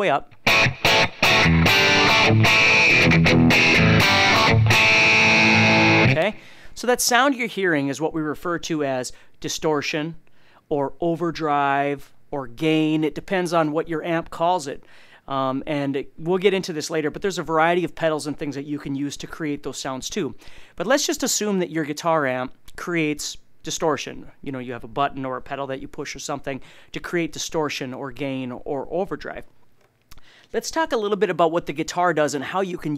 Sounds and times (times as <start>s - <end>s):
Speech: 0.0s - 0.3s, 6.1s - 29.5s, 30.5s - 32.9s.